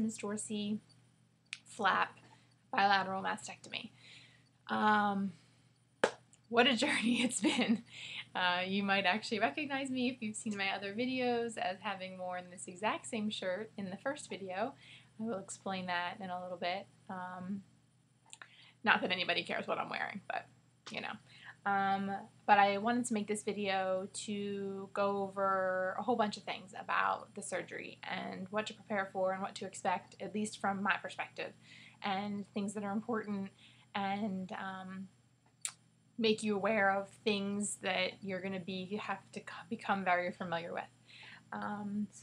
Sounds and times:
Speech: 0.0 - 0.8, 1.6 - 2.2, 2.8 - 3.9, 4.7 - 5.4, 6.5 - 17.6, 18.9 - 35.1, 36.2 - 40.9, 41.5 - 42.2.

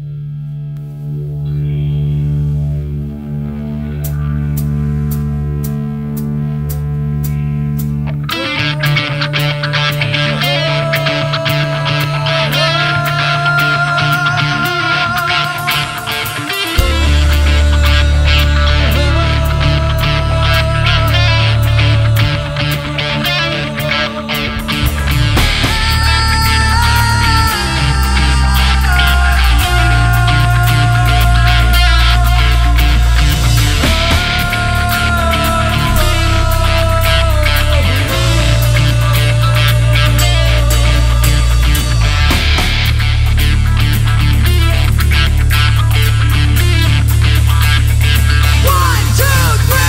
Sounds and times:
Progressive rock: 0.0 - 49.8.

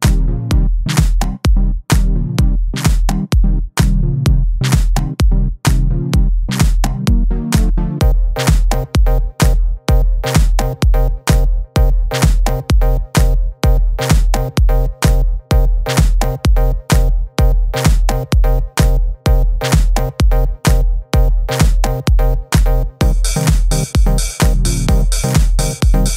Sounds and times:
Music: 0.0 - 26.1.

